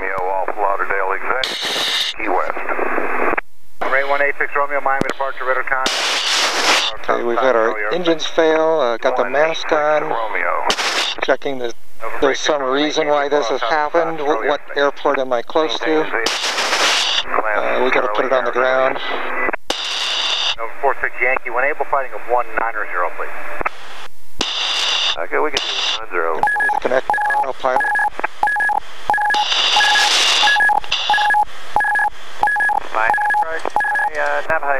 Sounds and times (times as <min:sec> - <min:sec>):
Speech: 0:00.0 - 0:01.5, 0:02.1 - 0:02.7, 0:03.8 - 0:05.9, 0:06.8 - 0:16.3, 0:17.2 - 0:19.3, 0:20.6 - 0:23.4, 0:25.2 - 0:28.0, 0:32.8 - 0:34.7.